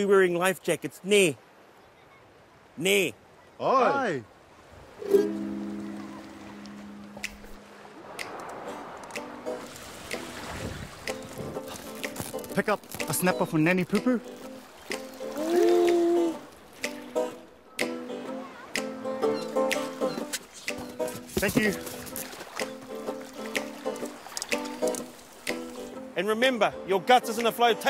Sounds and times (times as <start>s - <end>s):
Music: 8.2s - 27.9s.